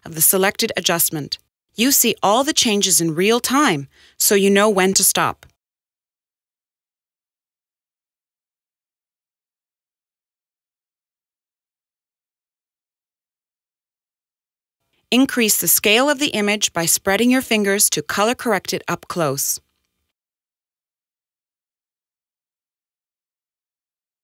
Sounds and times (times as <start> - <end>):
Speech: 0.0 - 5.5, 15.1 - 19.6.